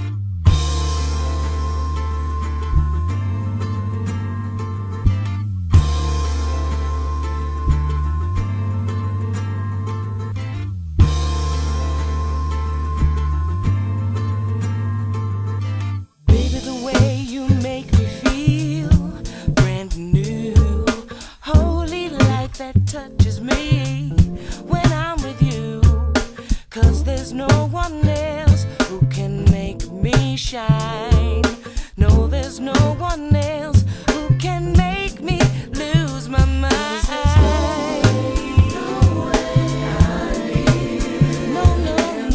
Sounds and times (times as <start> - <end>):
Music: 0.0 - 42.3.